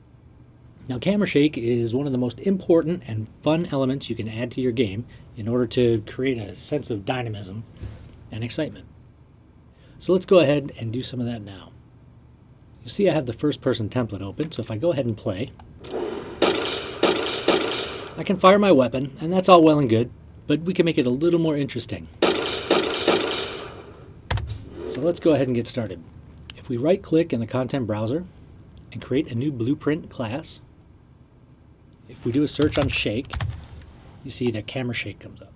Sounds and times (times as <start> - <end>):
Speech: 0.8 - 7.7, 8.3 - 8.9, 10.0 - 11.8, 12.8 - 15.6, 18.2 - 22.1, 24.9 - 28.3, 28.9 - 30.7, 32.0 - 33.4, 34.2 - 35.5.